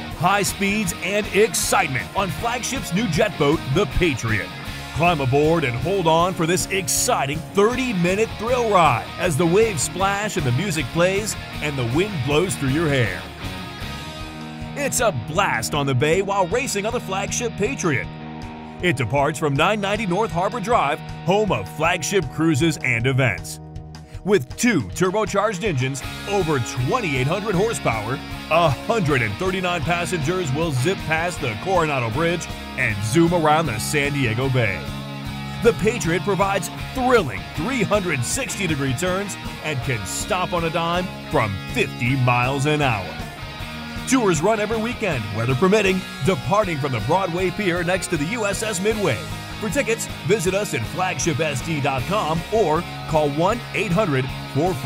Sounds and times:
Music: 0:00.0 - 0:54.8
Speech: 0:00.2 - 0:13.3, 0:14.8 - 0:18.1, 0:18.8 - 0:23.6, 0:24.2 - 0:34.9, 0:35.6 - 0:43.2, 0:44.1 - 0:54.8.

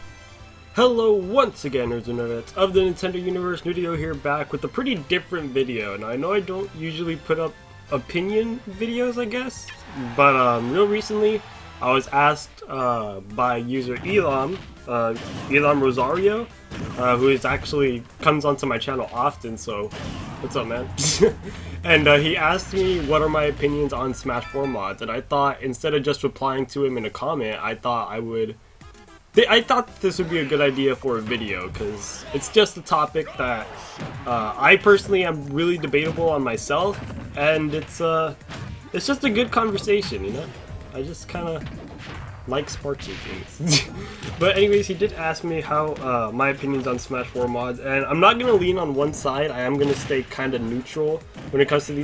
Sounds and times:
Music: 0:00.0 - 0:52.0
Speech: 0:00.8 - 0:28.6, 0:29.4 - 0:38.4, 0:39.0 - 0:41.7, 0:42.5 - 0:52.0.

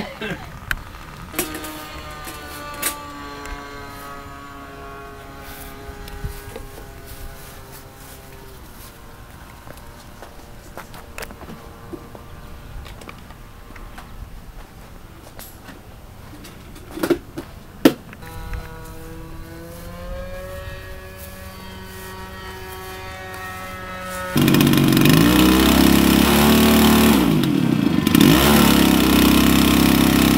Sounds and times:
Propeller, airscrew: 0:00.6 - 0:13.7, 0:18.2 - 0:30.3.

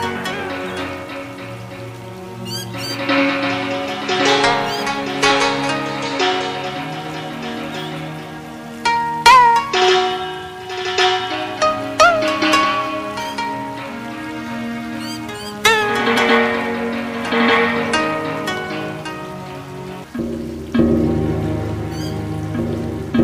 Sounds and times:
Traditional music: 0:00.0 - 0:23.2.

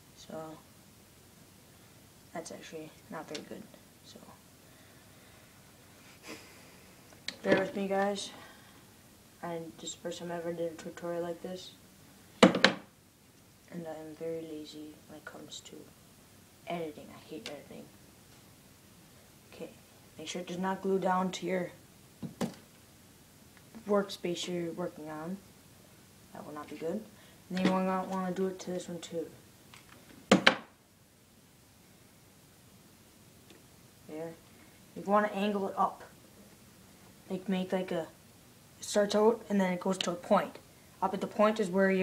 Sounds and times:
Speech: 0:00.2 - 0:00.7, 0:02.3 - 0:04.4, 0:07.3 - 0:08.4, 0:09.4 - 0:11.8, 0:13.7 - 0:15.9, 0:16.6 - 0:17.9, 0:19.5 - 0:21.8, 0:23.8 - 0:25.4, 0:26.3 - 0:29.4, 0:34.1 - 0:34.4, 0:35.0 - 0:36.2, 0:37.3 - 0:38.2, 0:38.8 - 0:42.0.

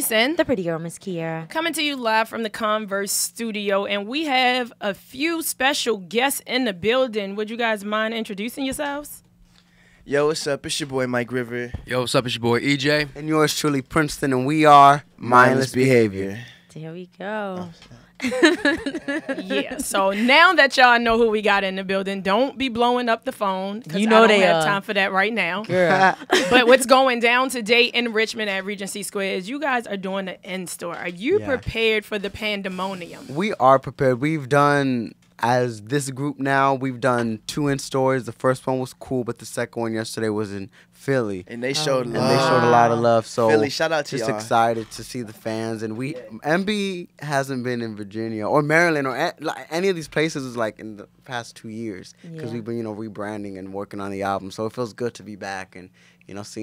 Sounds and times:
Speech: 0:23.8 - 0:24.9, 0:25.6 - 0:27.0, 0:30.9 - 0:31.9, 0:41.2 - 0:49.0, 0:49.8 - 0:56.6.

